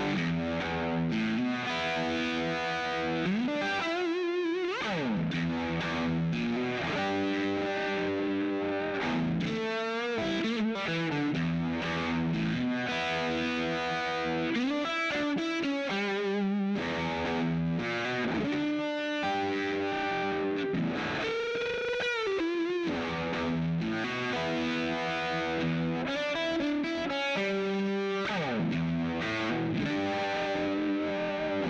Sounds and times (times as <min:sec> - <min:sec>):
Music: 0:00.0 - 0:31.7.